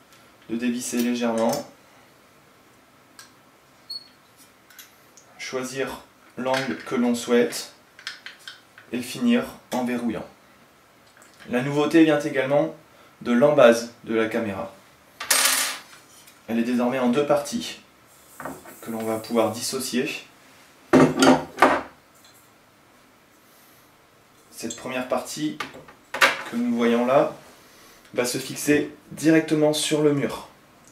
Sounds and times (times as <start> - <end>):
Speech: 0.5 - 1.7, 5.4 - 7.8, 8.9 - 10.4, 11.4 - 14.8, 16.5 - 17.9, 18.8 - 20.3, 24.5 - 25.7, 26.4 - 27.4, 28.1 - 30.6.